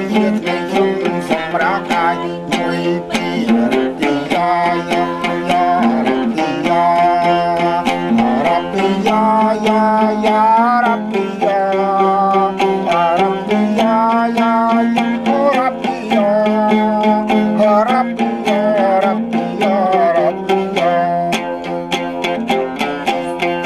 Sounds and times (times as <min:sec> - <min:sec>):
Music: 0:00.0 - 0:23.6.